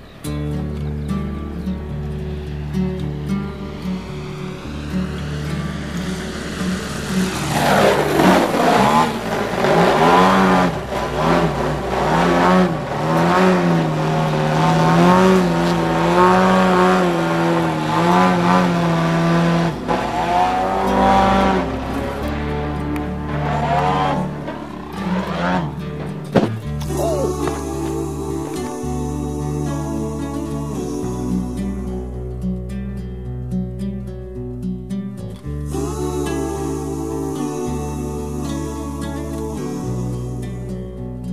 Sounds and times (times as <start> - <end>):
Aircraft: 0.0 - 26.4.